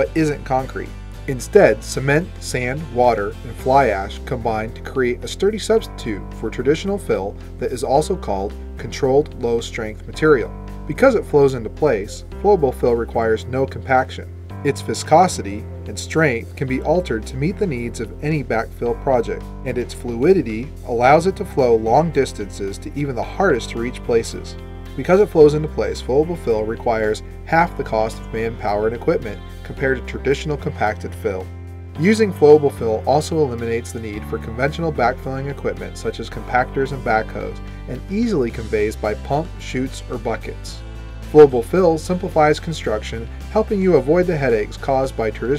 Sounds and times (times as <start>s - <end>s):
Music: 0.0s - 45.5s
Speech: 0.0s - 45.5s.